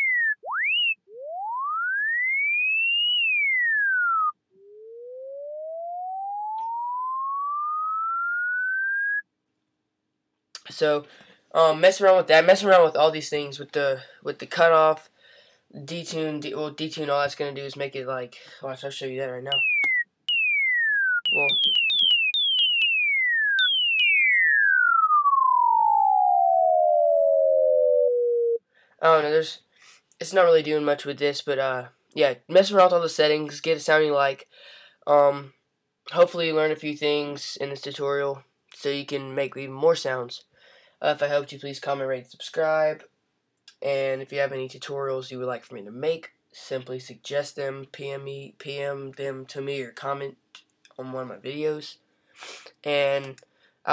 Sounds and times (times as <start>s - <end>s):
Chirp tone: 0.0s - 9.3s, 19.5s - 28.6s.